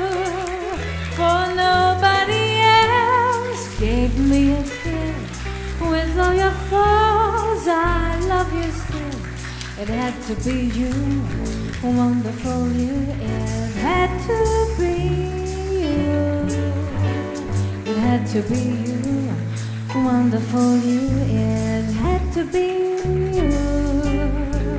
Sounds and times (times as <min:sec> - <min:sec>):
Jazz: 0:00.0 - 0:24.7
Wedding music: 0:00.0 - 0:24.7.